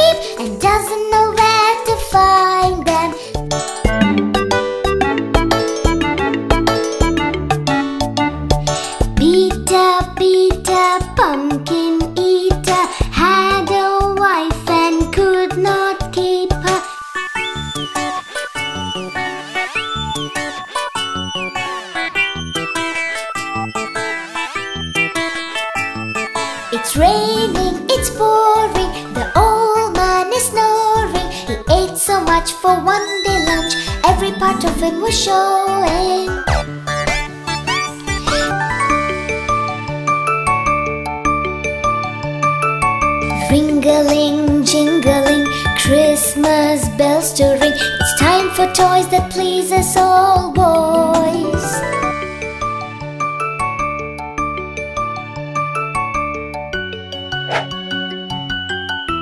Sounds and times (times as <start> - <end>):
Music for children: 0.0 - 59.2.